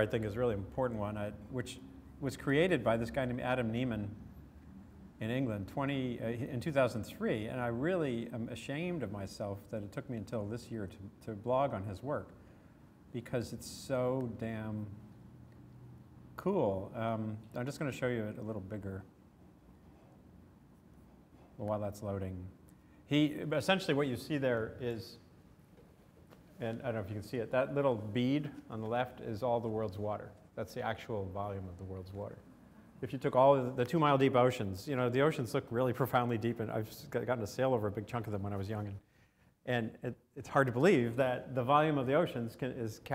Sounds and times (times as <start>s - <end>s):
Speech: 0.0s - 4.2s, 5.2s - 12.4s, 13.1s - 15.0s, 16.4s - 19.1s, 21.6s - 25.3s, 26.6s - 32.4s, 33.0s - 39.0s, 39.6s - 43.1s.